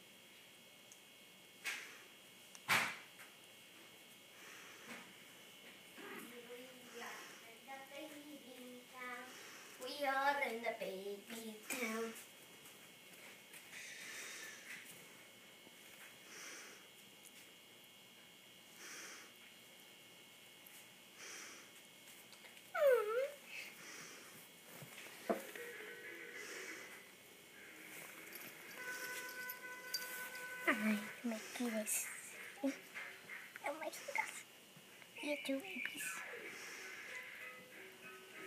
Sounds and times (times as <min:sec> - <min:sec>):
Speech: 0:30.7 - 0:32.3, 0:35.2 - 0:36.3.